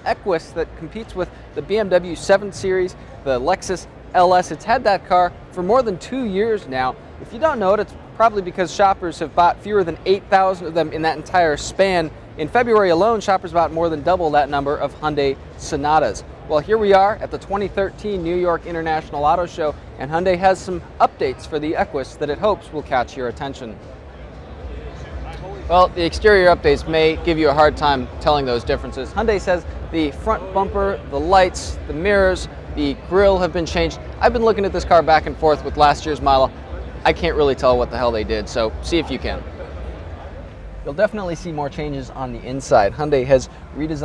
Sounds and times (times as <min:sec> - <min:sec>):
Speech: 0:00.0 - 0:23.8, 0:25.0 - 0:39.8, 0:40.9 - 0:44.0.